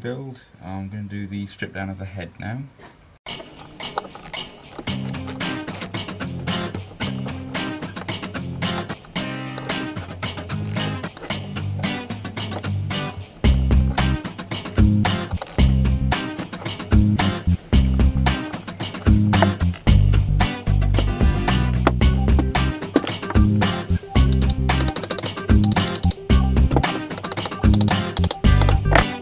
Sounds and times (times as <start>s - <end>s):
Music: 3.3s - 29.2s.